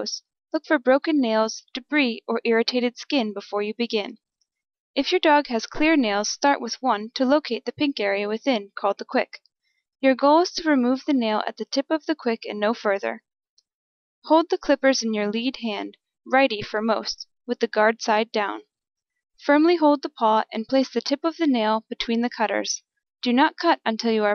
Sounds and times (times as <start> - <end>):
Speech: 0.0 - 4.2, 5.0 - 9.4, 10.0 - 13.2, 14.2 - 18.6, 19.4 - 24.3.